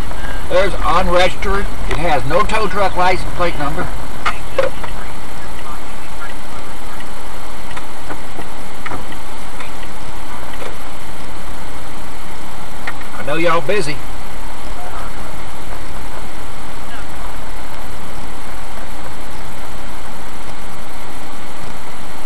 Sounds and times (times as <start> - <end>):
Speech: 0.0 - 7.3, 13.2 - 14.0, 14.7 - 17.9
Outside, urban or manmade: 0.0 - 22.2
Vehicle: 0.0 - 22.2.